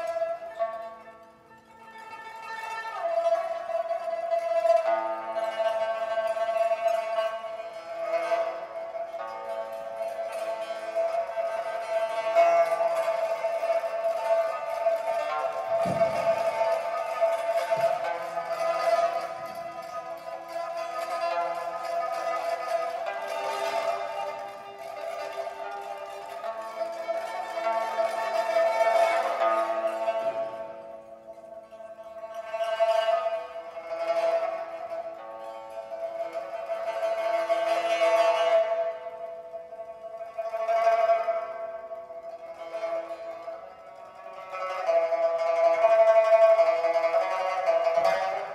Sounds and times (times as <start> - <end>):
Music: 0.0 - 48.5.